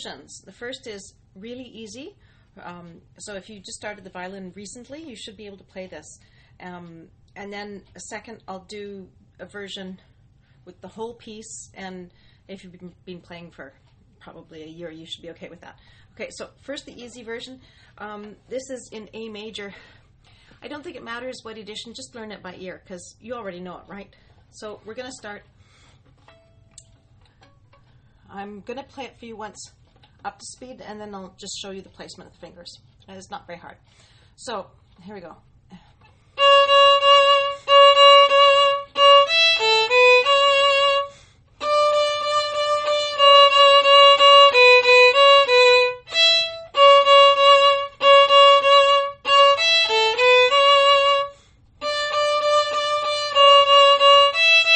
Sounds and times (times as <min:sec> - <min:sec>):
Speech: 0:00.0 - 0:10.1, 0:10.7 - 0:19.9, 0:20.6 - 0:25.5, 0:28.3 - 0:33.8, 0:34.4 - 0:35.9.